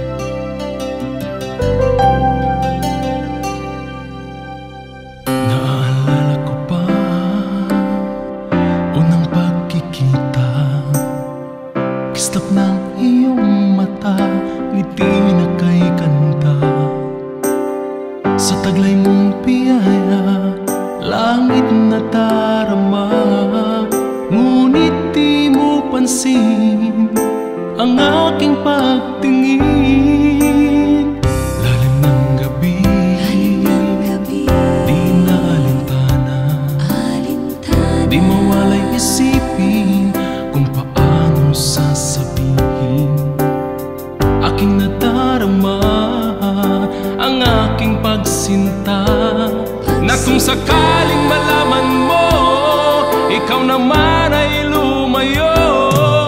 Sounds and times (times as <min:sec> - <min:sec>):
Music: 0:00.0 - 0:56.2.